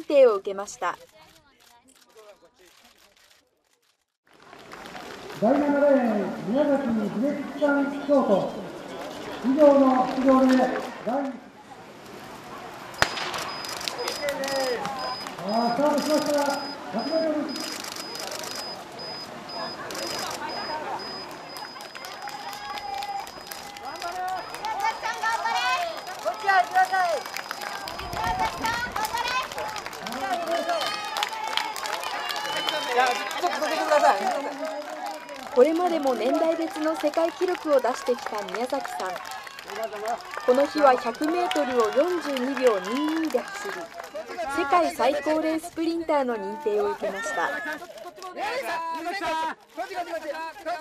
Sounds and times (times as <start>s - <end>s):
Inside, public space: 0.0s - 50.8s
Run: 0.7s - 12.2s, 12.9s - 50.8s.